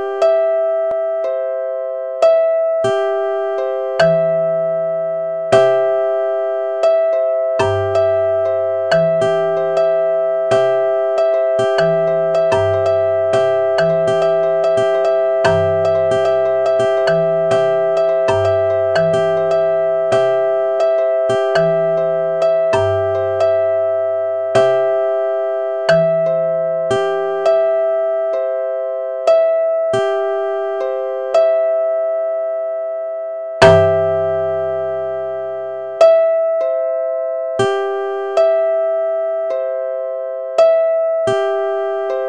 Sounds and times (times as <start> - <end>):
Music: 0.0 - 42.2.